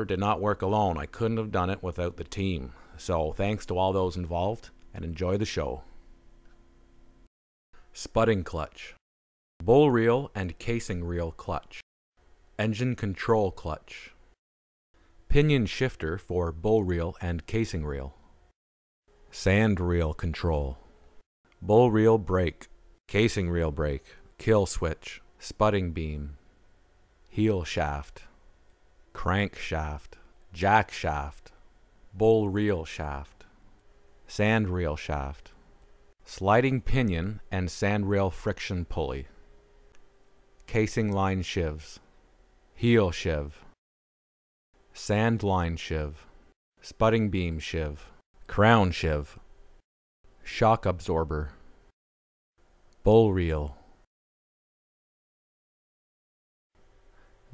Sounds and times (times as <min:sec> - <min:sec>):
Speech: 0:00.0 - 0:06.0, 0:07.9 - 0:09.0, 0:09.6 - 0:11.8, 0:12.6 - 0:14.2, 0:15.3 - 0:18.2, 0:19.3 - 0:20.9, 0:21.6 - 0:26.4, 0:27.3 - 0:28.4, 0:29.1 - 0:33.6, 0:34.3 - 0:35.6, 0:36.2 - 0:39.4, 0:40.7 - 0:42.1, 0:42.8 - 0:43.8, 0:45.0 - 0:49.4, 0:50.4 - 0:51.6, 0:53.0 - 0:53.9.